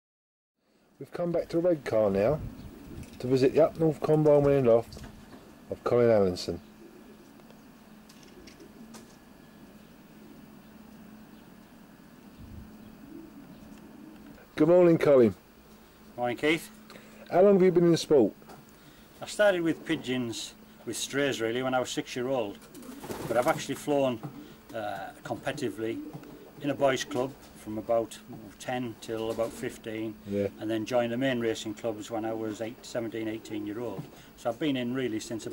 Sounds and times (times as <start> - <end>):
Speech: 1.0 - 2.5, 3.2 - 5.0, 5.7 - 6.6, 14.6 - 15.4, 16.2 - 18.4, 19.2 - 22.6, 23.3 - 26.0, 26.6 - 35.5.